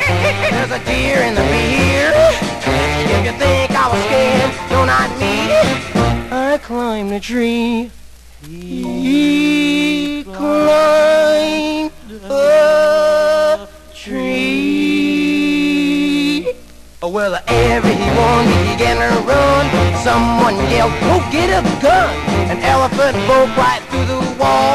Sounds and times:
Rock and roll: 0.0 - 6.4, 17.4 - 24.7.

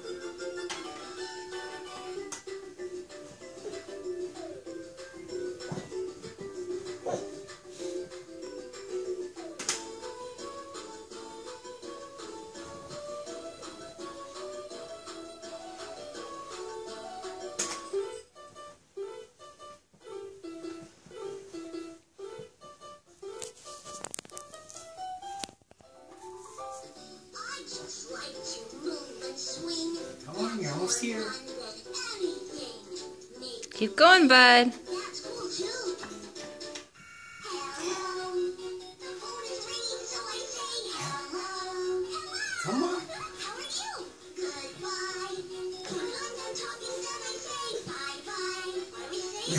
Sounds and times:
Inside, small room: 0.0 - 49.5
Music: 0.0 - 49.5.

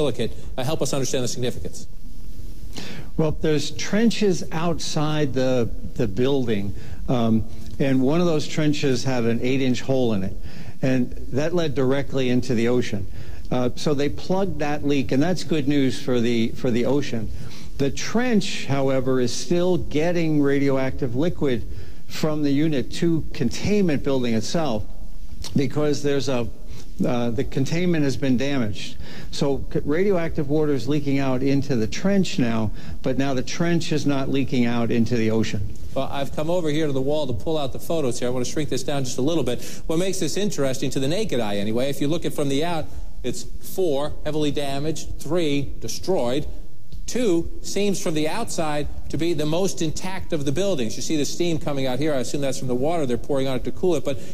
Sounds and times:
Speech: 0.0 - 1.9, 3.2 - 24.9, 25.5 - 46.5, 47.1 - 54.2.

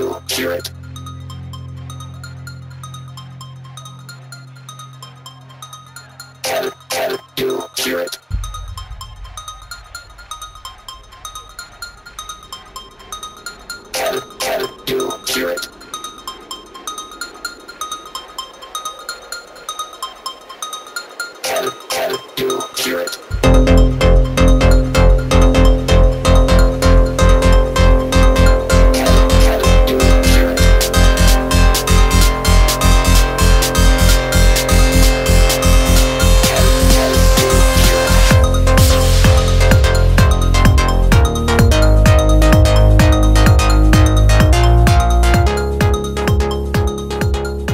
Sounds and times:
Music: 0.0 - 47.7.

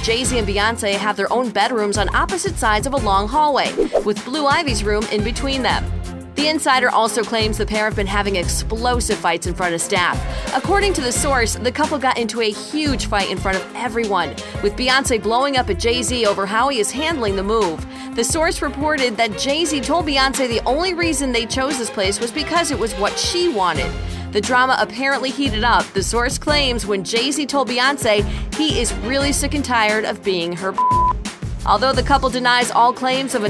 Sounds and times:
Speech: 0.0 - 5.8, 6.4 - 30.8, 31.6 - 33.5
Music: 0.0 - 33.5.

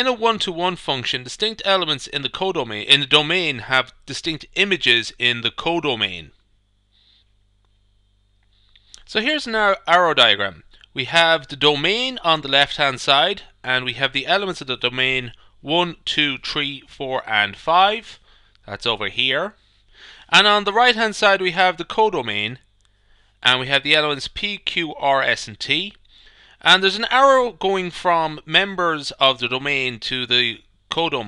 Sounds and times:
Speech: 0.0 - 6.4, 9.0 - 19.6, 20.3 - 22.6, 23.4 - 26.0, 26.6 - 31.2.

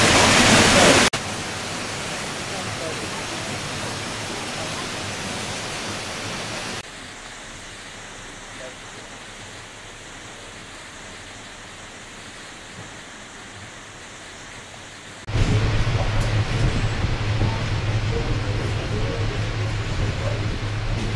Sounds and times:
Waterfall: 0.0 - 21.1.

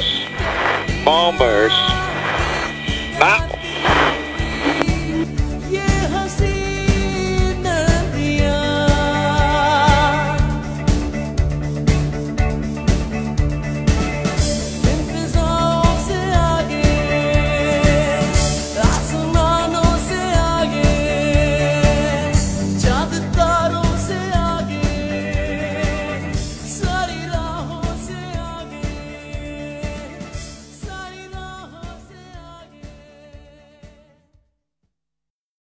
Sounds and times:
Singing: 15.0 - 30.2, 30.8 - 34.2.

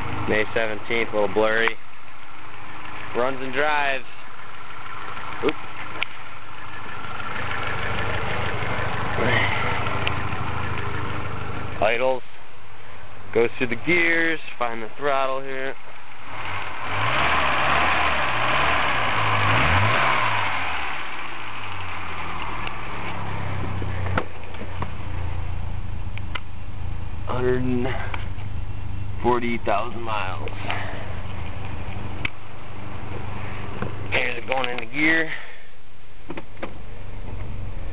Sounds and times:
Medium engine (mid frequency): 0.0 - 37.9
Vehicle: 0.0 - 37.9
Accelerating, revving, vroom: 16.4 - 21.0.

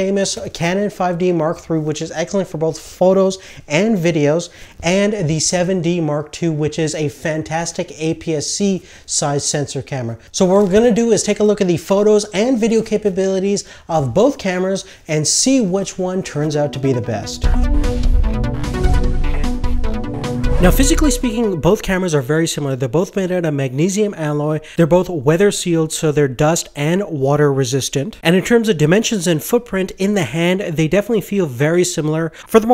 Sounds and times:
Speech: 0.0 - 17.4, 20.6 - 32.7
Music: 16.2 - 22.0.

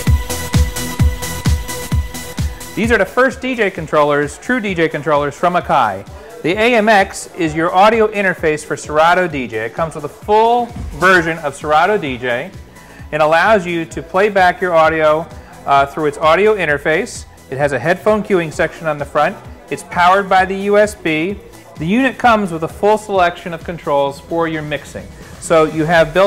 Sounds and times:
Music: 0.0 - 26.2
Speech: 2.8 - 12.5, 13.1 - 26.2.

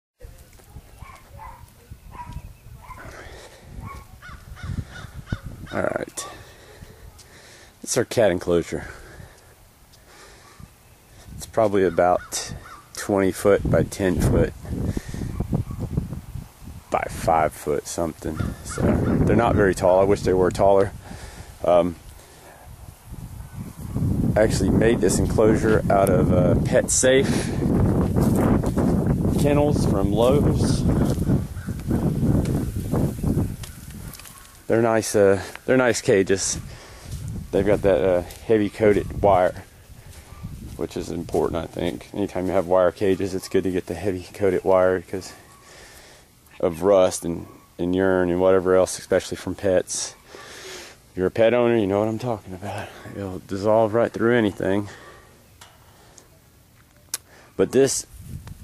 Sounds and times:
Outside, rural or natural: 0.1 - 58.6
Dog: 1.0 - 3.2, 3.8 - 4.1, 40.2 - 40.5
Speech: 5.7 - 6.4, 7.8 - 9.0, 11.4 - 14.6, 16.9 - 21.0, 21.6 - 22.0, 24.4 - 27.5, 29.3 - 30.9, 34.7 - 36.6, 37.5 - 39.7, 40.8 - 45.4, 46.5 - 50.2, 51.2 - 55.0, 57.6 - 58.1.

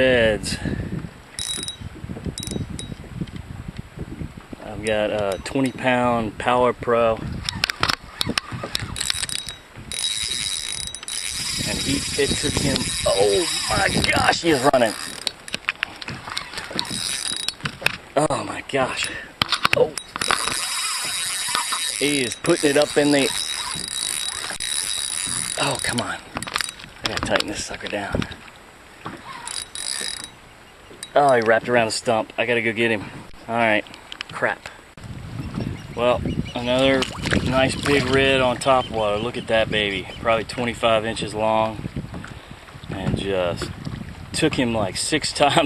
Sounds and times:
Speech: 11.7 - 15.0, 18.2 - 19.1, 22.0 - 23.4, 25.6 - 26.2, 27.1 - 28.3, 31.2 - 33.8, 36.0 - 41.8, 43.0 - 43.7, 44.4 - 45.6.

